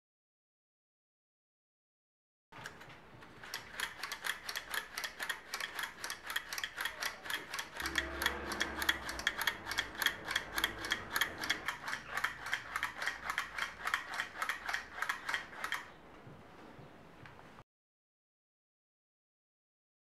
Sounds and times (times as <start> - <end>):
Gears: 2.6 - 15.9
Ratchet, pawl: 3.4 - 15.9.